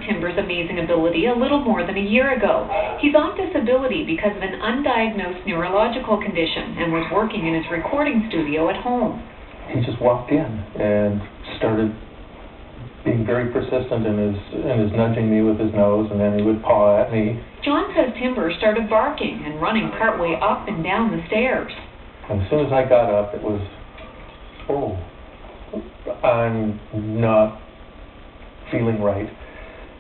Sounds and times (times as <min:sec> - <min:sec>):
Speech: 0:00.0 - 0:12.0, 0:13.0 - 0:21.7, 0:22.3 - 0:23.8, 0:24.7 - 0:25.1, 0:25.8 - 0:27.6, 0:28.7 - 0:29.4.